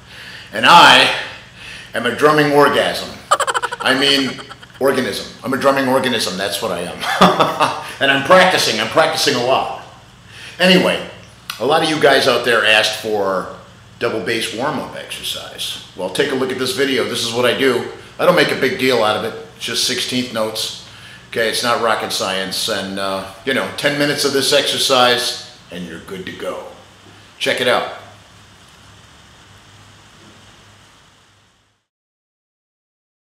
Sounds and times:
Speech: 0.6s - 1.2s, 2.0s - 7.0s, 8.0s - 9.9s, 10.6s - 26.8s, 27.4s - 28.1s.

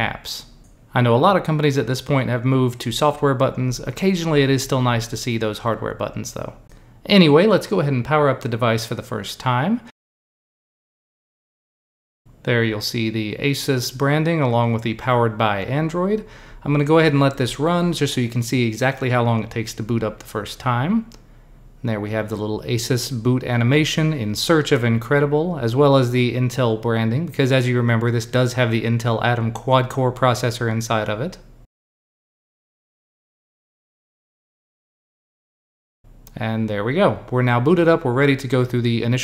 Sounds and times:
Speech: 0.0s - 10.0s, 12.4s - 21.2s, 21.8s - 31.5s, 36.3s - 39.2s.

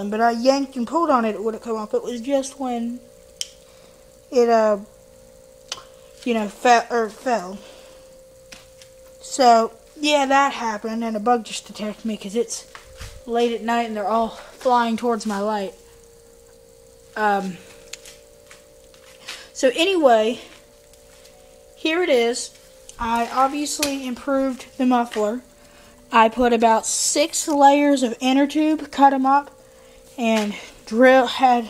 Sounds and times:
Speech: 0.0s - 3.0s, 4.3s - 4.9s, 6.2s - 7.6s, 9.2s - 12.6s, 13.3s - 15.8s, 17.2s - 17.6s, 19.6s - 20.5s, 21.8s - 25.4s, 26.2s - 29.5s, 30.2s - 31.6s.

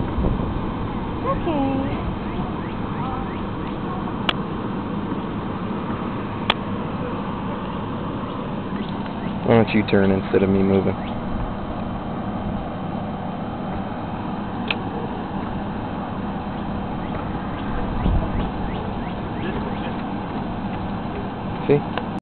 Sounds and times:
Outside, urban or manmade: 0.0s - 22.2s
Speech: 1.2s - 2.0s, 9.4s - 11.0s, 21.6s - 21.9s.

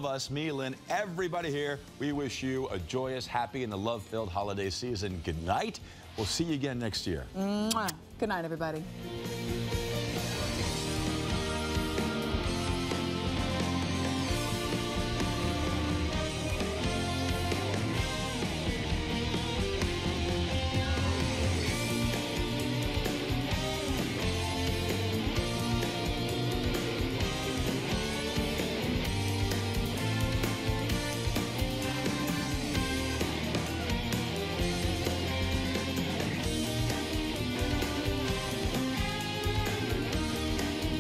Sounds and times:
Music: 0.0s - 41.0s.

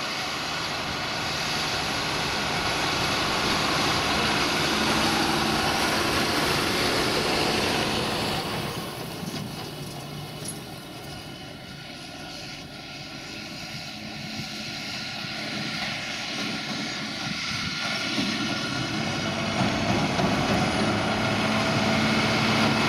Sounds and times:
Outside, rural or natural: 0.0s - 22.8s
Vehicle: 0.0s - 22.8s.

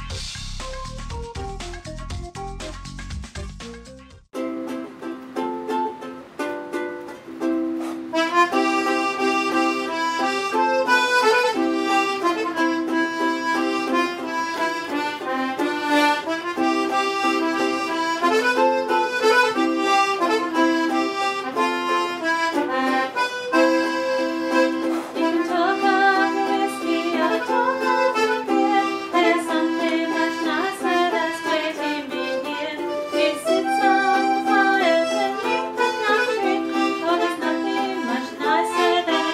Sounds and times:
Accordion: 0.0s - 2.8s, 4.6s - 39.3s.

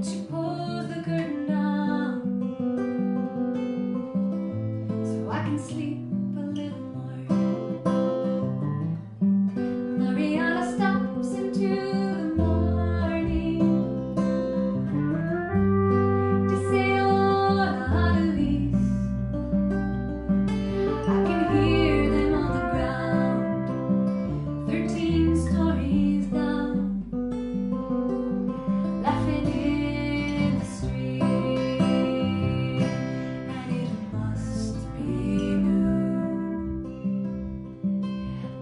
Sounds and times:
Musical instrument: 14.9s - 18.4s, 19.8s - 25.6s.

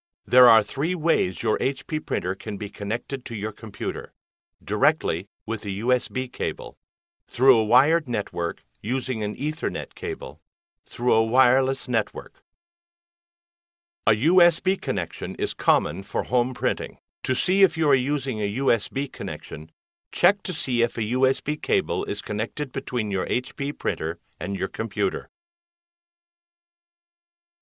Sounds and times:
Speech: 0.3s - 12.4s, 14.1s - 25.3s.

